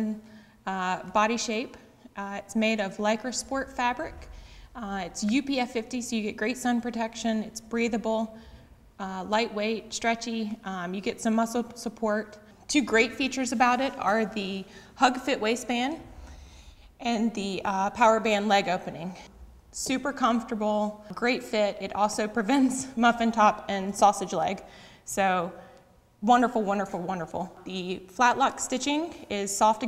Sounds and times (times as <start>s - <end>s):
Speech: 0.0s - 8.3s, 9.0s - 16.0s, 17.0s - 19.2s, 19.8s - 25.5s, 26.2s - 29.8s.